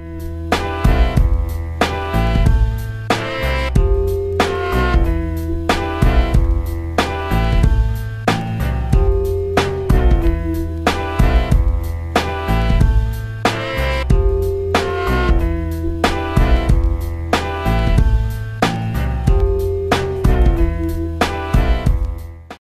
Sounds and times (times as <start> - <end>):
Music: 0.0 - 22.6.